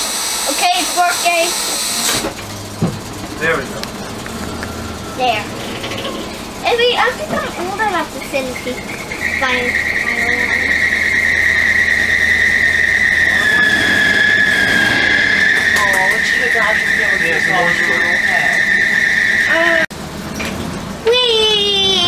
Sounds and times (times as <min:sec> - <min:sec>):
Bus: 0:00.0 - 0:22.0
Speech: 0:15.8 - 0:18.6, 0:21.0 - 0:22.0.